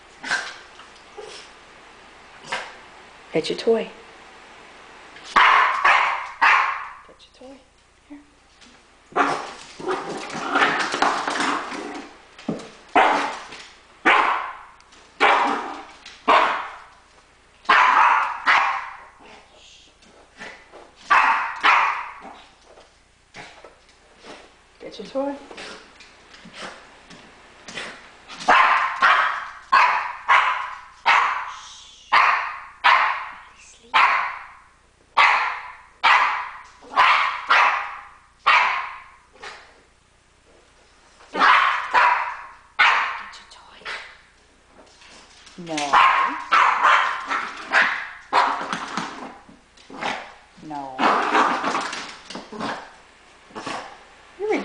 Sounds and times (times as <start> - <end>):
Bow-wow: 5.4 - 7.0, 9.1 - 11.0, 13.0 - 13.4, 14.0 - 16.8, 17.7 - 19.1, 21.1 - 22.4, 28.5 - 34.6, 35.2 - 39.6, 41.4 - 43.3, 45.9 - 48.8
Yip: 5.4 - 7.0, 14.1 - 14.6, 17.7 - 19.1, 21.1 - 22.2, 28.5 - 34.6, 35.2 - 39.6, 41.4 - 43.2, 45.9 - 48.7.